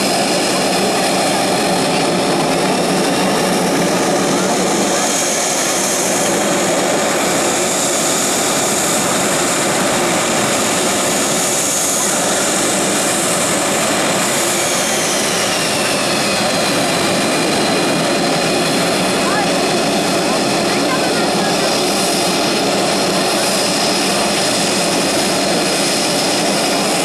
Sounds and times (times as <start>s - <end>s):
Fixed-wing aircraft, airplane: 0.0s - 27.0s.